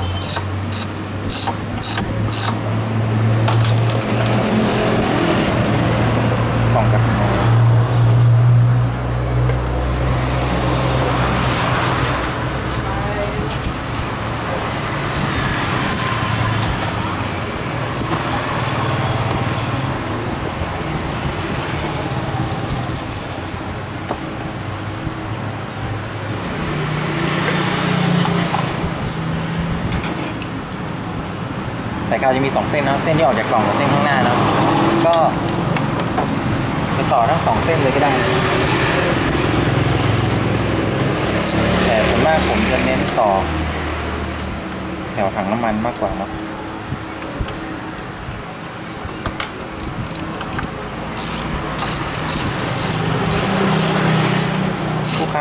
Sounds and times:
Motor vehicle (road): 0.0s - 55.4s.

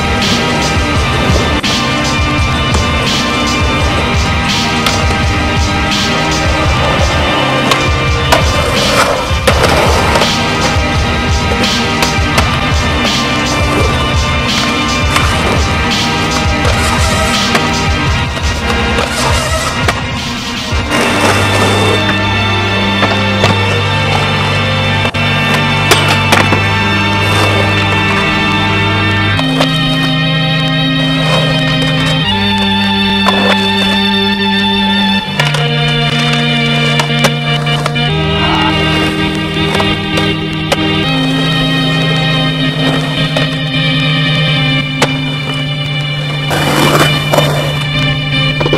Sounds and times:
Skateboard: 0.0s - 48.7s.

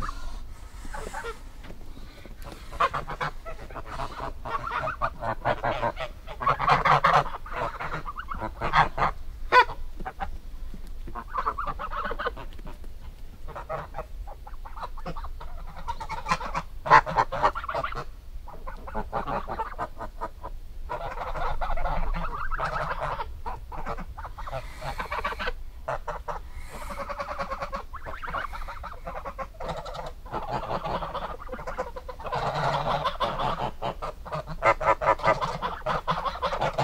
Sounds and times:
Chicken, rooster: 2.5s - 10.3s, 11.1s - 12.8s, 13.5s - 36.8s.

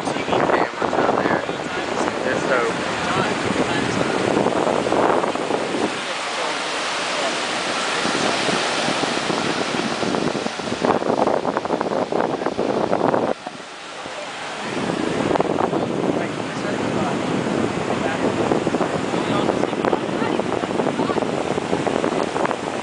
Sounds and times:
Waves, surf: 0.0s - 22.8s.

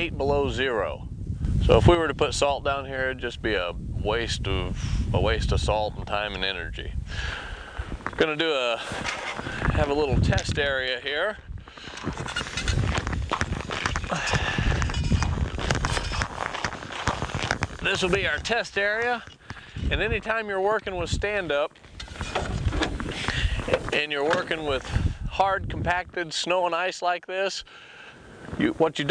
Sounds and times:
Speech: 0.0s - 7.0s, 8.2s - 8.9s, 9.7s - 11.4s, 17.8s - 19.3s, 19.9s - 21.7s, 23.6s - 27.7s, 28.6s - 29.1s.

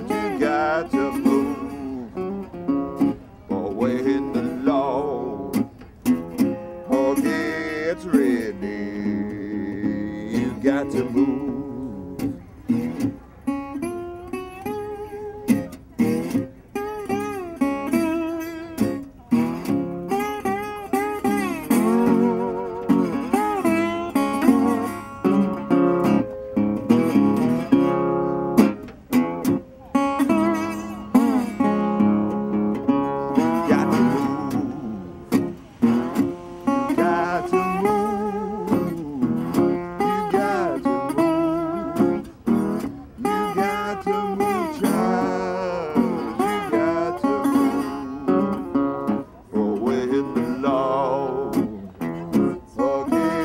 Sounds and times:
Electric guitar: 0.0s - 53.4s.

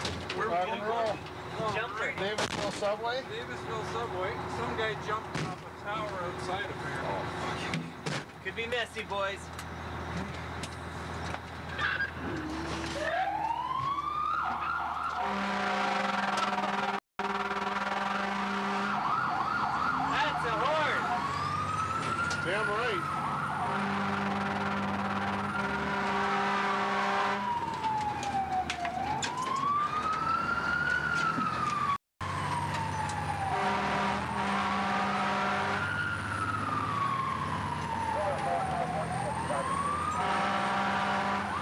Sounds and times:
Vehicle: 0.0s - 41.6s.

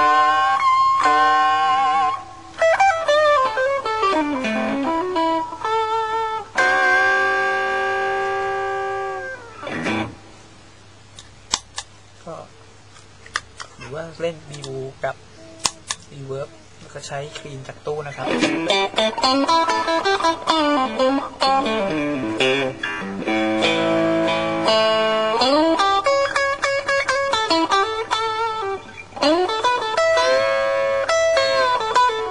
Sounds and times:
Guitar: 0.0s - 11.9s, 13.2s - 32.3s
Speech: 12.2s - 12.6s, 13.8s - 15.2s, 16.1s - 18.5s.

